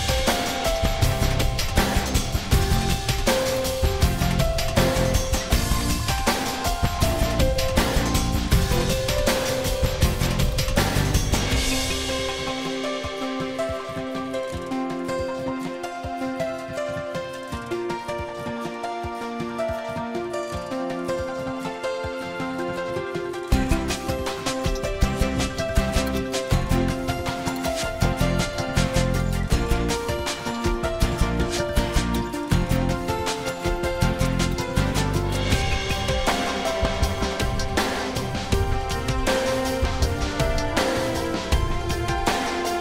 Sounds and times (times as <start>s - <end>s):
Music: 0.0s - 42.8s.